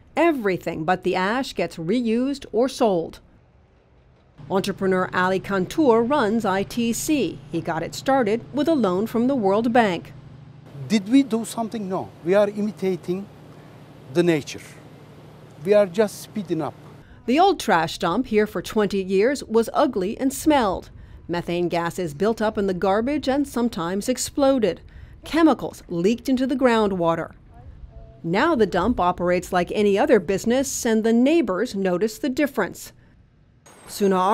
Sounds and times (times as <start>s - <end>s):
Speech: 0.2s - 3.2s, 4.5s - 10.1s, 10.8s - 13.3s, 14.1s - 14.8s, 15.6s - 32.9s, 33.9s - 34.3s.